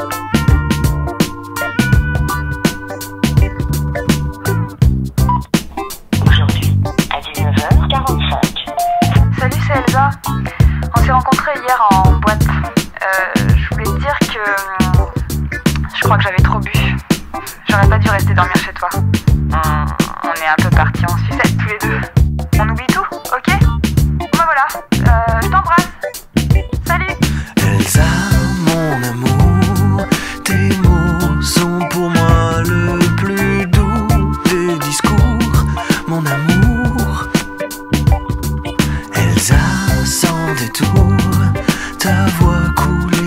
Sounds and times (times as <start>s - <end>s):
Music: 0.0s - 43.2s
Speech: 6.2s - 10.3s, 11.0s - 15.1s, 15.8s - 17.0s, 17.7s - 25.9s.